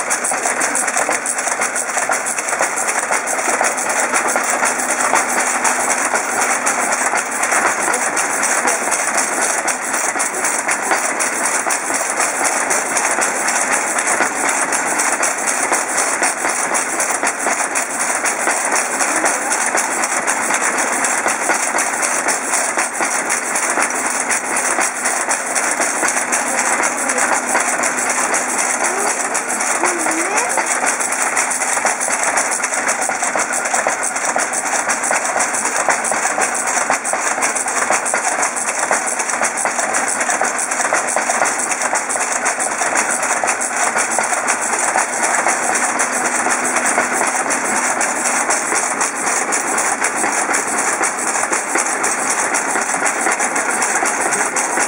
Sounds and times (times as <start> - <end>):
Speech: 0.1 - 2.3, 7.6 - 11.0, 18.8 - 19.9, 26.2 - 31.0, 53.5 - 54.8.